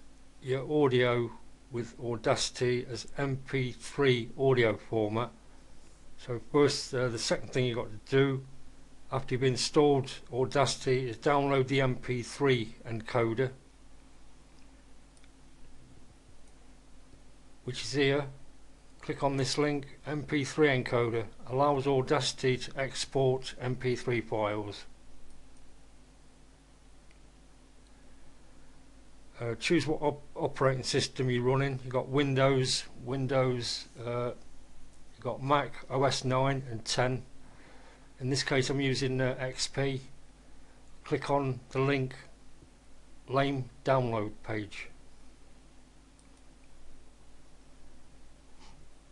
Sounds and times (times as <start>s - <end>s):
Speech: 0.4s - 5.4s, 6.2s - 8.5s, 9.1s - 13.6s, 17.6s - 18.4s, 19.0s - 24.9s, 29.4s - 34.4s, 35.2s - 37.3s, 38.2s - 40.2s, 41.0s - 42.4s, 43.3s - 45.0s.